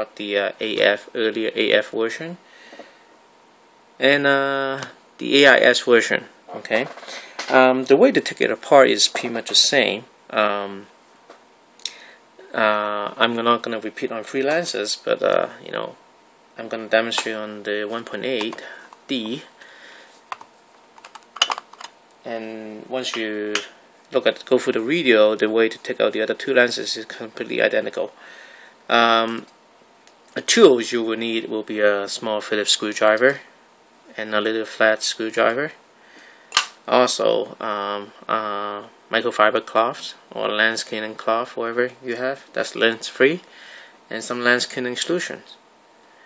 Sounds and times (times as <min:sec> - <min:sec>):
Speech: 0:00.0 - 0:02.4, 0:04.0 - 0:10.9, 0:12.4 - 0:16.0, 0:16.6 - 0:19.5, 0:22.3 - 0:28.2, 0:28.9 - 0:29.5, 0:30.3 - 0:33.5, 0:34.1 - 0:35.8, 0:36.9 - 0:43.5, 0:44.1 - 0:45.6.